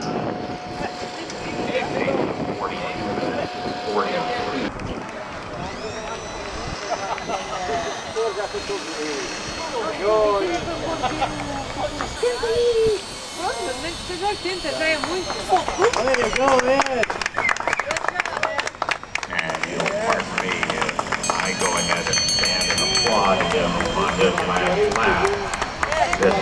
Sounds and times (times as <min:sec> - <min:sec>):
Outside, urban or manmade: 0:00.0 - 0:26.4
Speech: 0:00.8 - 0:04.7, 0:19.3 - 0:26.4.